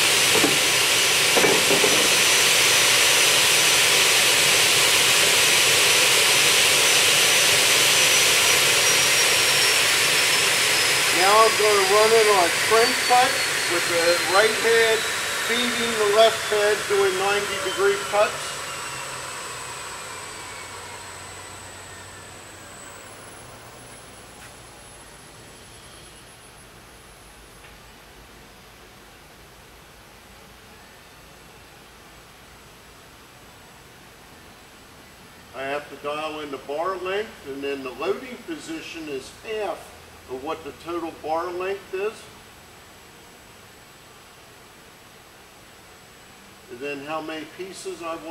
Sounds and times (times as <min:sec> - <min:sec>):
Speech: 0:11.1 - 0:18.5, 0:35.6 - 0:42.4, 0:46.7 - 0:48.3.